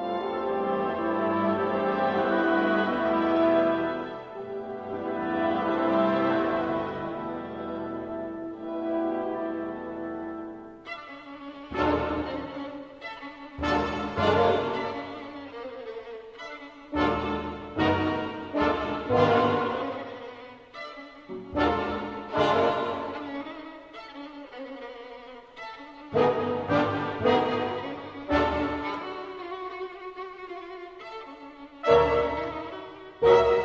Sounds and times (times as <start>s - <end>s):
Music: 0.0s - 33.6s.